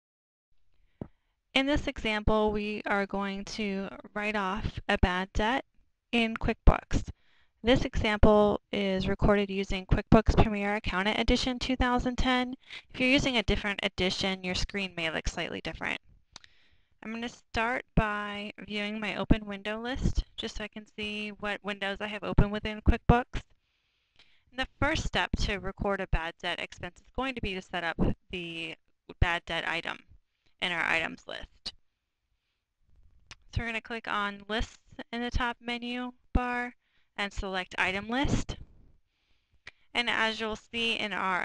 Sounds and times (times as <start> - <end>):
Speech: 1.6 - 5.6, 6.2 - 16.0, 17.0 - 23.4, 24.6 - 30.0, 30.6 - 31.7, 33.3 - 38.6, 40.0 - 41.4.